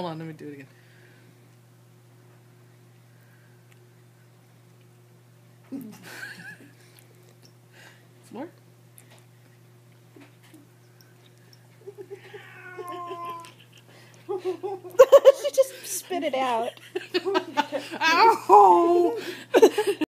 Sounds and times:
Speech: 18.0s - 19.2s.

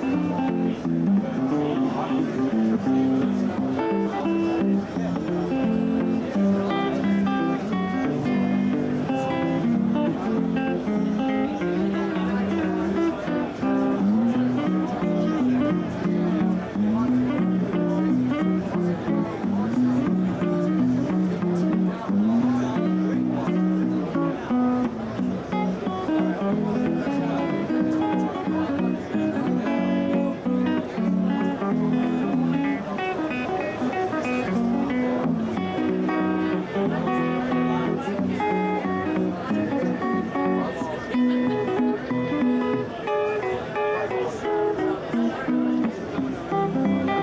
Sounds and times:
Music: 0.0s - 47.2s
Speech: 0.0s - 47.2s.

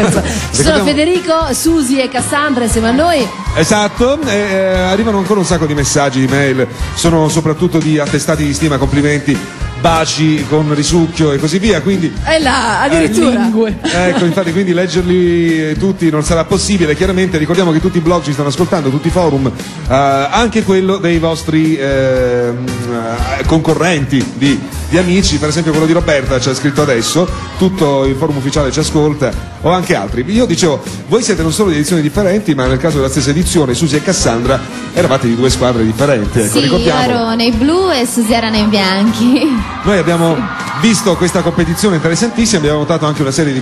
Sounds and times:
Music: 0.0s - 43.6s.

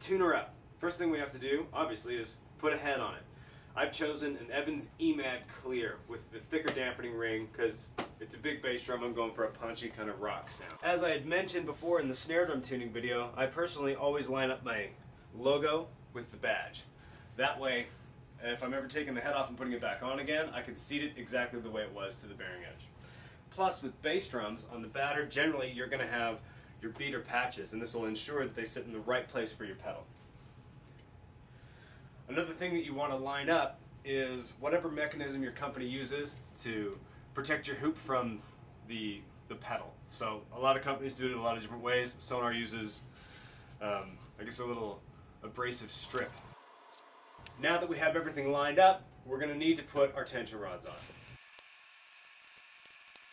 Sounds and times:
Speech: 0.0s - 22.9s, 23.5s - 30.1s, 32.3s - 43.1s, 43.8s - 46.4s, 47.6s - 51.0s.

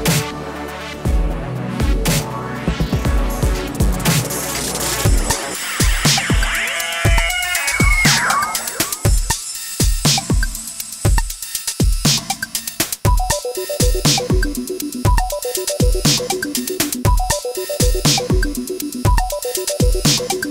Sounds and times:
Sampler: 4.5s - 9.8s.

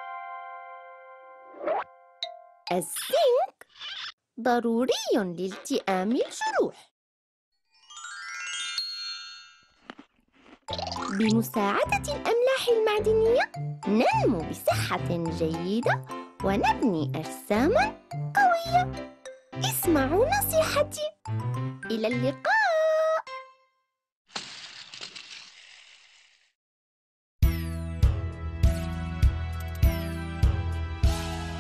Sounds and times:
Child speech, kid speaking: 2.7s - 3.6s, 4.4s - 6.8s, 11.2s - 18.9s, 19.6s - 21.2s, 21.9s - 23.3s
Music for children: 7.7s - 9.7s, 10.7s - 23.8s.

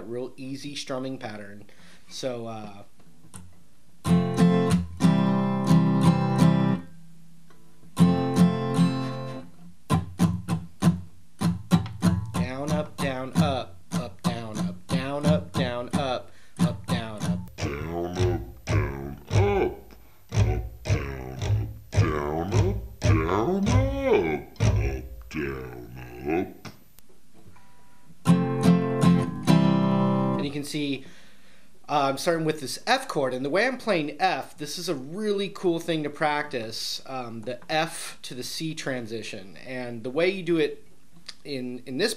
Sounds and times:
Speech: 0.0s - 2.9s, 12.4s - 26.7s, 30.4s - 31.1s, 31.9s - 42.1s
Acoustic guitar: 3.0s - 26.7s, 27.3s - 31.2s.

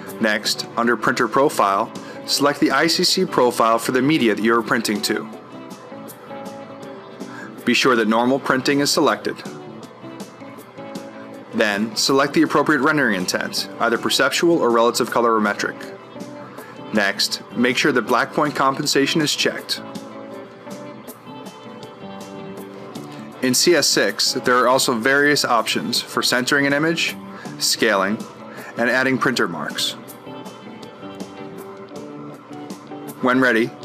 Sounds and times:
Music: 0.0s - 33.8s
Speech: 0.1s - 5.4s, 7.6s - 9.5s, 11.6s - 15.9s, 16.9s - 19.9s, 23.4s - 30.0s, 33.2s - 33.8s.

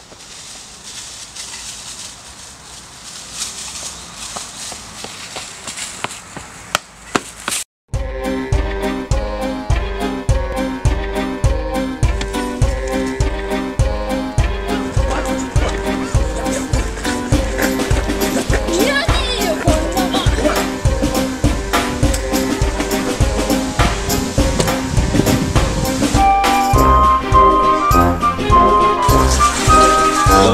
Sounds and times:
Music: 7.9s - 30.5s
Speech: 18.6s - 20.6s, 30.3s - 30.5s.

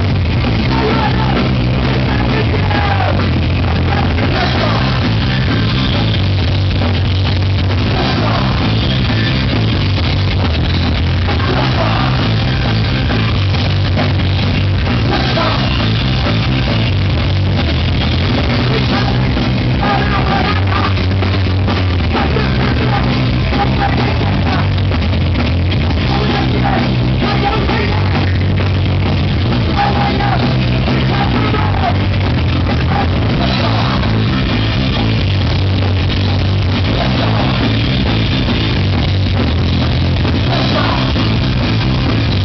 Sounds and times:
Music: 0.0s - 42.4s.

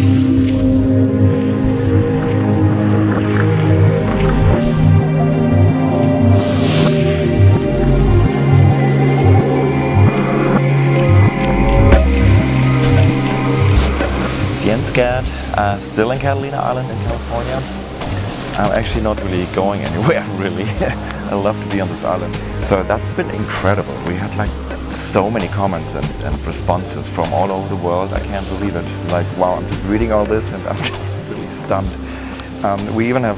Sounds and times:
Music: 0.0s - 33.3s
Speech: 14.5s - 17.7s, 18.6s - 33.3s.

